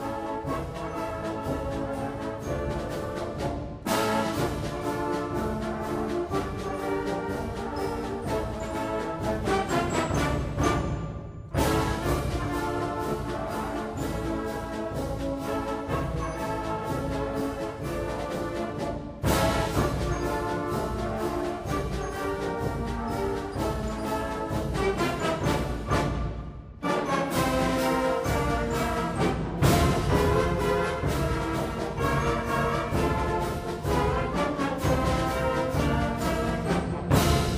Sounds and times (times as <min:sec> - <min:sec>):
Music: 0:00.0 - 0:37.5.